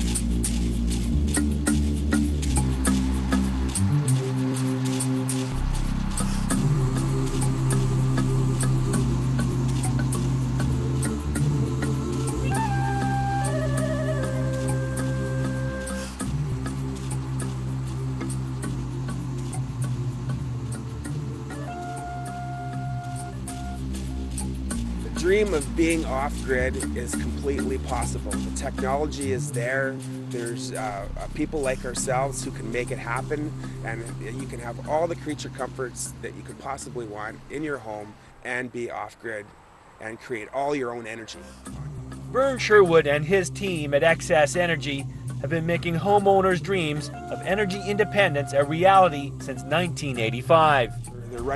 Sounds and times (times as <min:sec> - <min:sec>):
Music: 0:00.0 - 0:38.0, 0:41.4 - 0:51.5
Rustling leaves: 0:00.0 - 0:51.5
Speech: 0:25.1 - 0:41.5, 0:42.4 - 0:51.5.